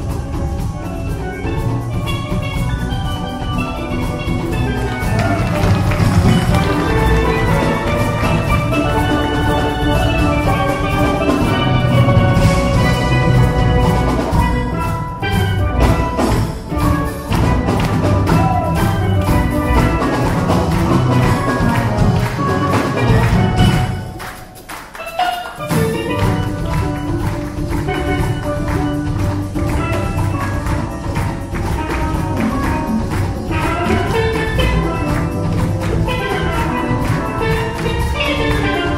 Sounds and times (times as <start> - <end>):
Steelpan: 0.0 - 38.9.